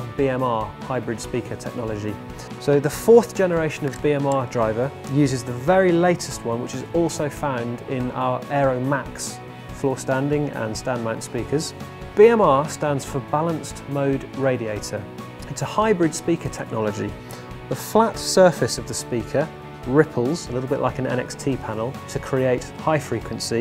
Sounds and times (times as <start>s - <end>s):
Music: 0.0s - 23.6s
Speech: 0.0s - 23.6s.